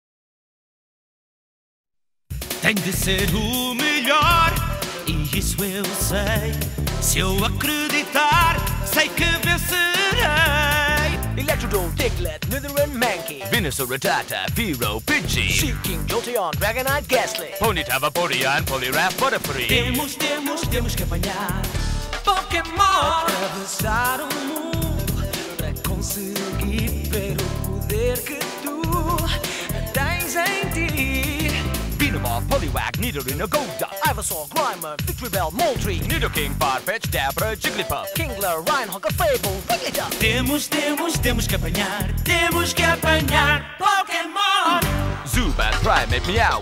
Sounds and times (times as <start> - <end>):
Pop music: 2.4 - 46.6.